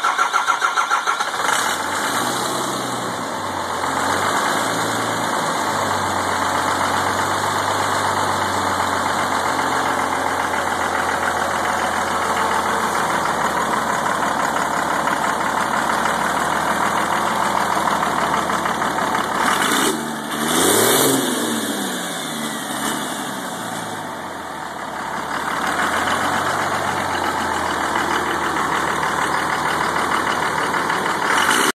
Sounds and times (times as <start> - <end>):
Vehicle: 0.0 - 31.7.